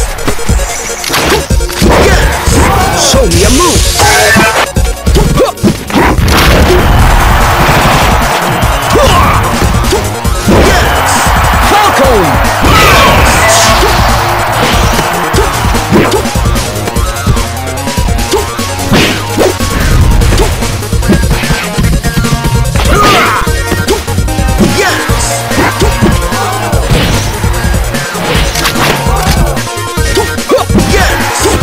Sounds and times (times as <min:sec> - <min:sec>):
Music: 0:00.0 - 0:31.6
Smash, crash: 0:05.7 - 0:11.1
Speech: 0:11.6 - 0:13.2.